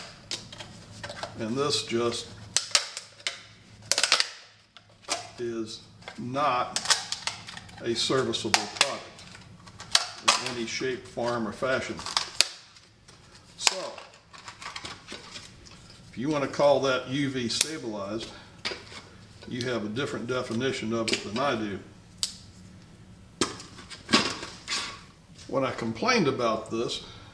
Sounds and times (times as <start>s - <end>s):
Speech: 1.4s - 2.3s, 5.4s - 6.8s, 7.8s - 9.2s, 10.2s - 12.0s, 13.6s - 14.1s, 16.1s - 18.4s, 19.4s - 21.9s, 25.5s - 27.1s.